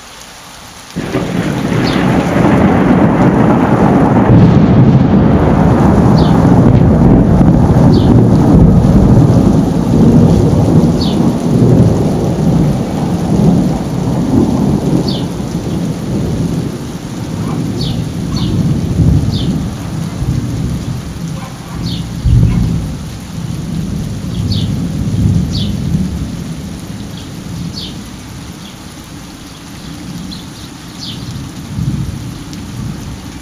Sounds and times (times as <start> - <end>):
Rain: 0.0 - 33.4
Thunder: 1.0 - 26.4.